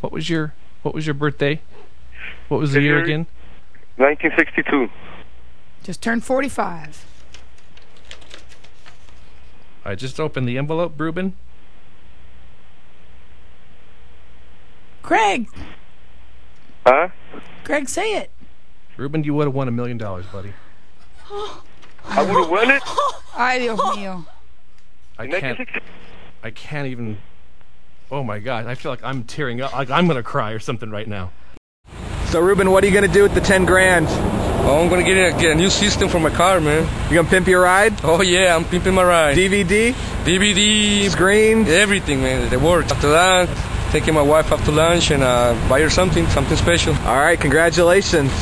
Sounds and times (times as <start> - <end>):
Speech: 0.0 - 1.6, 2.2 - 3.3, 4.0 - 4.9, 9.8 - 11.4, 19.0 - 20.5, 22.1 - 24.3, 25.2 - 25.8, 26.4 - 27.2, 28.1 - 31.3, 32.3 - 48.4
Laughter: 22.1 - 24.3.